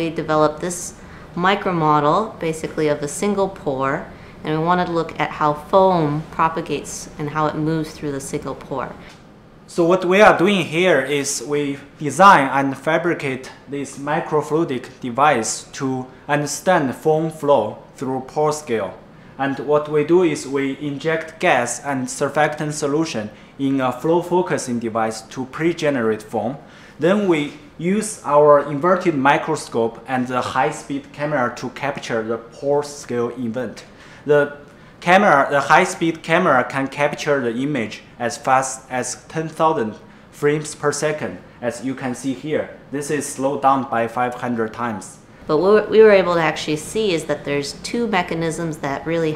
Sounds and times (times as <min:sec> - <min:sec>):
Speech: 0:00.0 - 0:09.1, 0:09.7 - 0:49.3.